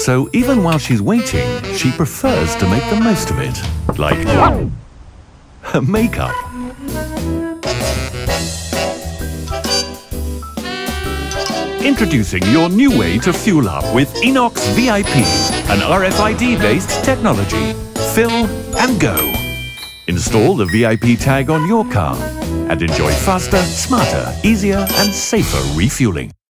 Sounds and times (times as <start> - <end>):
Music: 0.0 - 4.4, 6.0 - 26.4
Speech: 0.0 - 4.6, 5.6 - 6.4, 11.8 - 19.5, 20.1 - 26.4.